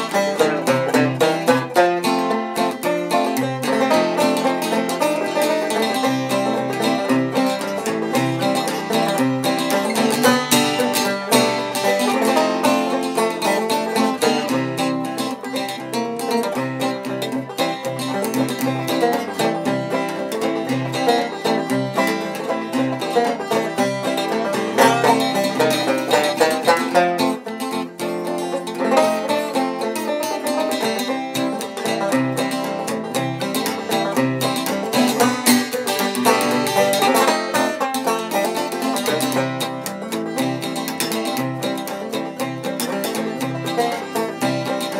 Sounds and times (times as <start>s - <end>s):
Acoustic guitar: 0.0s - 44.9s
Banjo: 0.0s - 44.9s
Bluegrass: 0.0s - 44.9s.